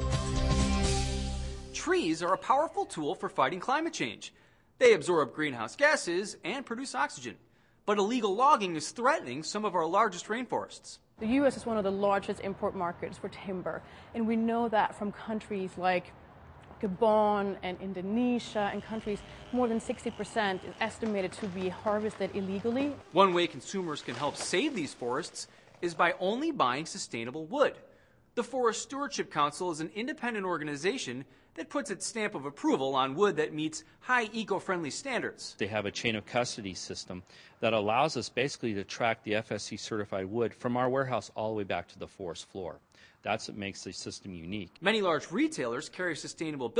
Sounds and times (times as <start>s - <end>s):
Speech: 1.8s - 16.1s, 16.8s - 27.8s, 28.4s - 46.7s.